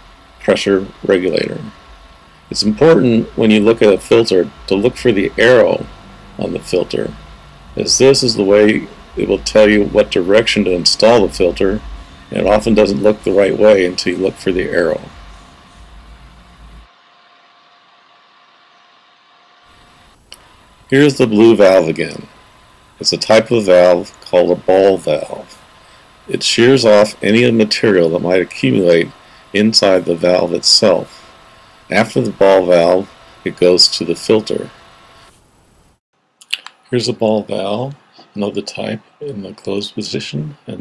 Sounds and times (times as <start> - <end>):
Speech: 0.4 - 1.8, 2.5 - 7.2, 7.8 - 15.2, 20.9 - 22.3, 23.0 - 25.6, 26.3 - 31.2, 31.9 - 34.8, 36.4 - 40.8.